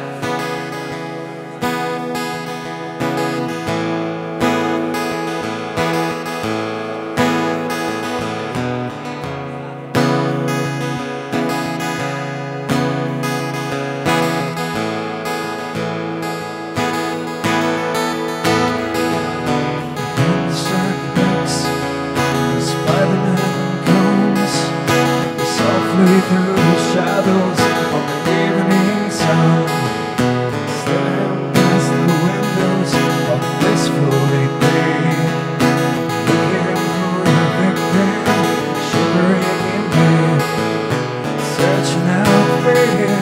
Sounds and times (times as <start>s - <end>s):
Music: 0.0s - 43.2s.